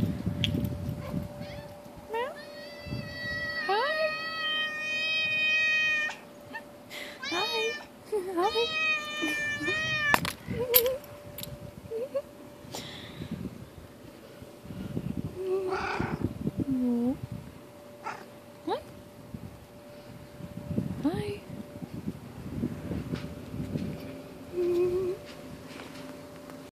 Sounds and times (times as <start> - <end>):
Speech: 21.0 - 21.5.